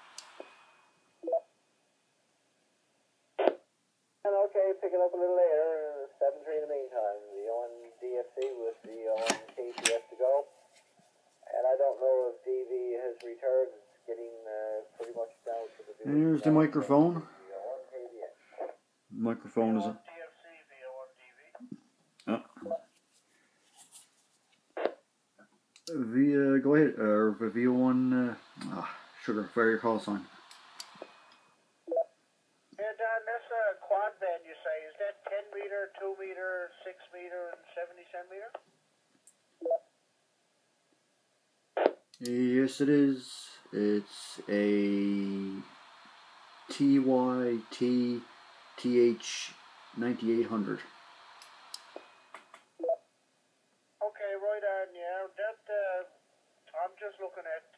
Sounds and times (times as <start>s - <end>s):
Inside, small room: 0.0s - 57.7s
Radio: 3.4s - 3.6s, 4.3s - 10.5s, 11.4s - 21.7s, 24.8s - 25.0s, 25.9s - 31.4s, 32.8s - 38.7s, 41.8s - 52.3s, 54.0s - 56.1s, 56.7s - 57.7s
Speech: 4.3s - 10.5s, 11.4s - 22.8s, 25.9s - 30.3s, 32.8s - 38.6s, 42.2s - 45.7s, 46.7s - 50.9s, 54.0s - 56.1s.